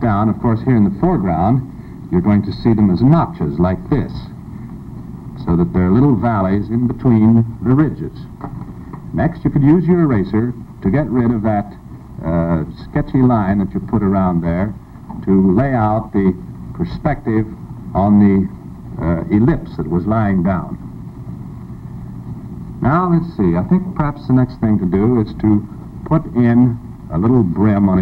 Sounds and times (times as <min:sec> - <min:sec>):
Speech: 0:00.0 - 0:04.4, 0:05.4 - 0:08.4, 0:09.1 - 0:20.8, 0:22.8 - 0:28.0.